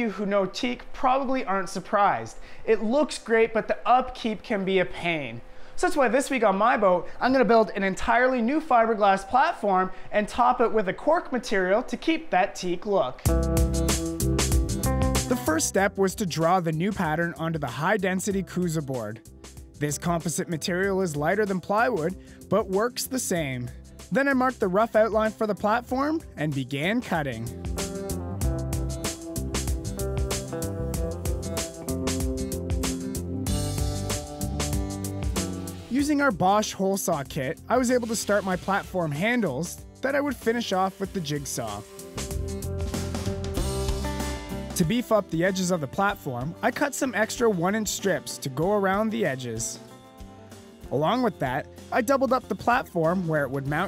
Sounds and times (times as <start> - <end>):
Speech: 0.0 - 13.3, 15.3 - 19.2, 19.8 - 27.6, 35.9 - 41.9, 44.8 - 49.8, 50.9 - 53.8.